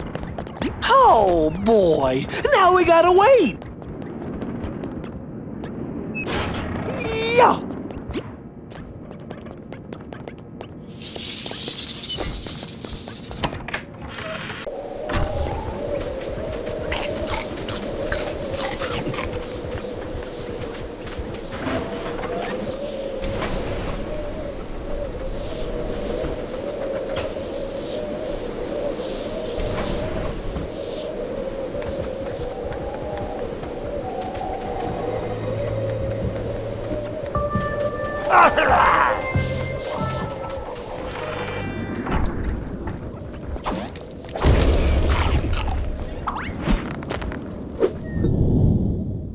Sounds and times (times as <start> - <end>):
Speech: 0.8 - 3.6, 7.0 - 7.6.